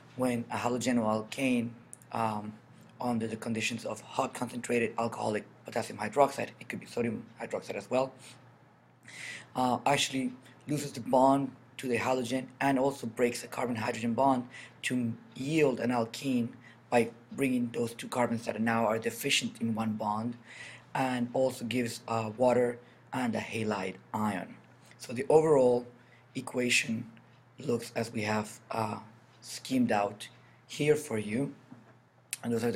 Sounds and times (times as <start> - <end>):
Speech: 0.1 - 8.4, 9.5 - 31.7, 32.4 - 32.7.